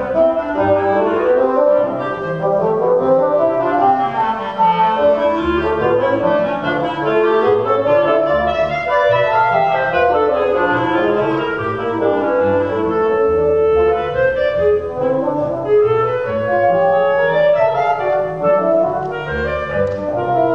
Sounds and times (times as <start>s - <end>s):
Cello: 0.0s - 20.5s
Double bass: 0.0s - 20.5s
Pizzicato: 0.0s - 20.5s
Wind instrument, woodwind instrument: 0.0s - 20.5s.